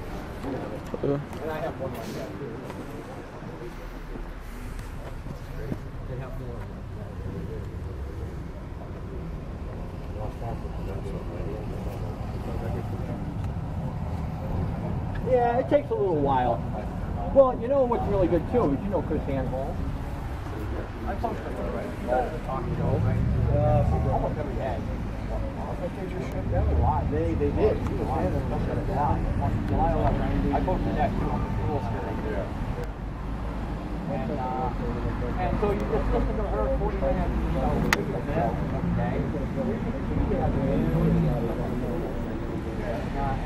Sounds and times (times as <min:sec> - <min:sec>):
Speech: 0:00.4 - 0:13.4, 0:14.4 - 0:19.8, 0:20.4 - 0:32.9, 0:34.0 - 0:43.4.